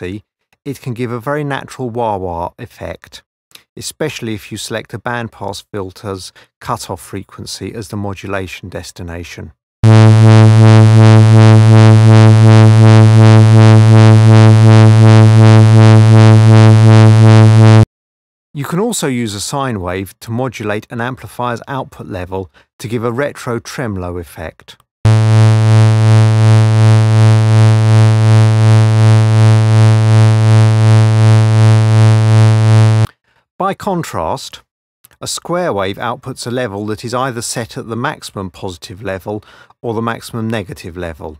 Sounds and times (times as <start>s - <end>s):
Speech: 0.0s - 9.6s, 18.6s - 24.8s, 33.6s - 41.3s.